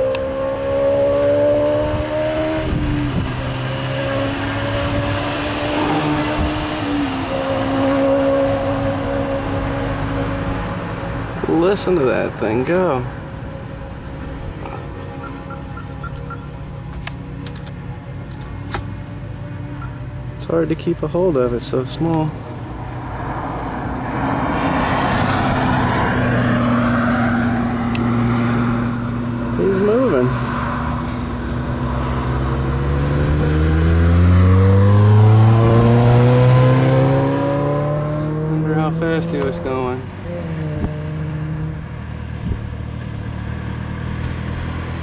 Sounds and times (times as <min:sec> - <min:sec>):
Speech: 0:11.4 - 0:13.1, 0:20.4 - 0:22.4, 0:29.6 - 0:30.4, 0:38.6 - 0:40.1.